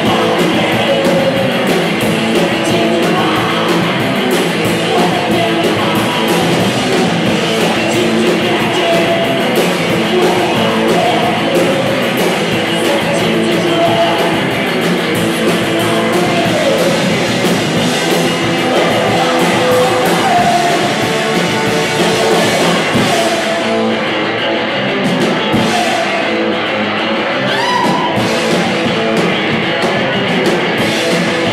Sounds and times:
Music: 0.0 - 31.5.

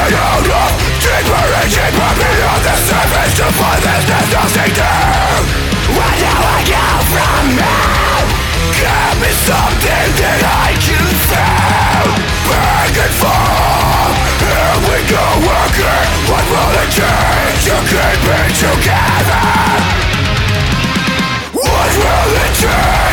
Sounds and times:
Bass guitar: 0.0 - 23.1
Electric guitar: 0.0 - 23.1.

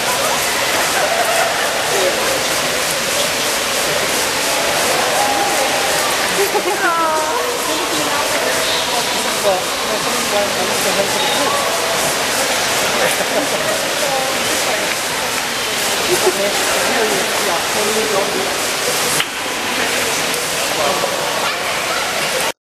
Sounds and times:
Speech: 0.0 - 22.6.

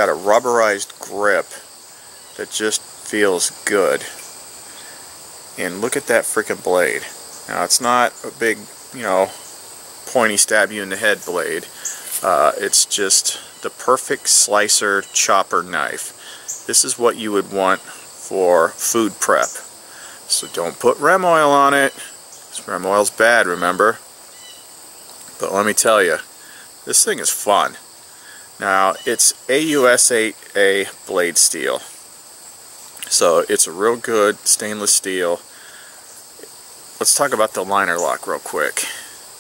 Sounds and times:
Speech: 0.0 - 1.7, 2.4 - 4.2, 5.6 - 9.4, 10.1 - 19.7, 20.3 - 24.0, 25.3 - 27.8, 28.6 - 32.0, 33.0 - 35.5, 36.4 - 39.2
Outside, rural or natural: 0.0 - 39.4.

